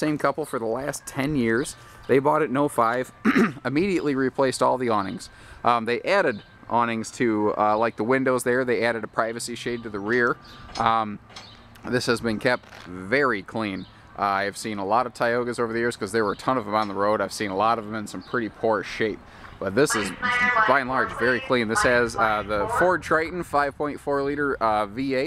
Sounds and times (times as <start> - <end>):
Speech: 0.0 - 11.2, 11.8 - 25.2.